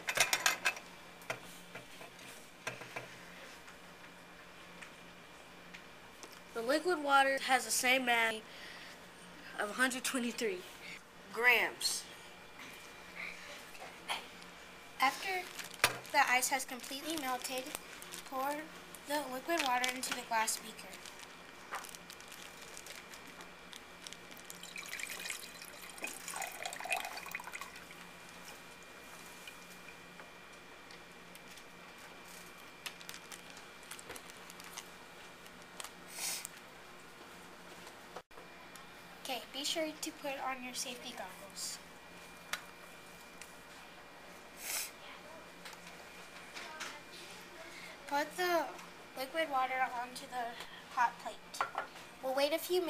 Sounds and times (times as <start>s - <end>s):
Liquid: 24.4s - 28.0s.